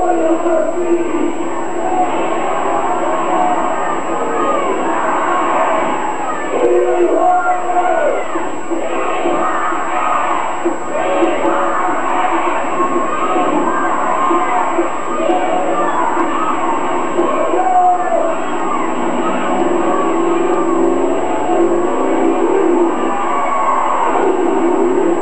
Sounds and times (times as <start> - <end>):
Speech: 0.0 - 5.0, 6.2 - 9.2.